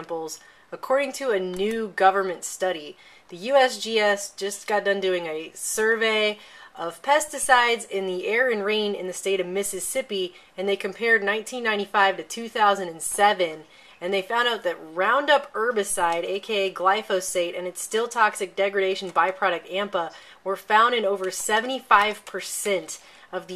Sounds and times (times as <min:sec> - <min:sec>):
Speech: 0:00.0 - 0:23.5.